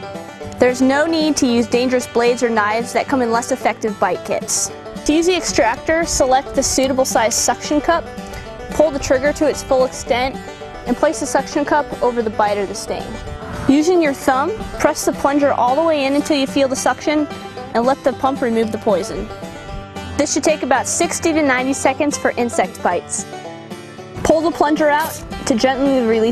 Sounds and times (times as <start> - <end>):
Music: 0.0 - 26.3
Speech: 0.6 - 8.0, 8.8 - 19.3, 20.2 - 23.3, 24.2 - 26.3.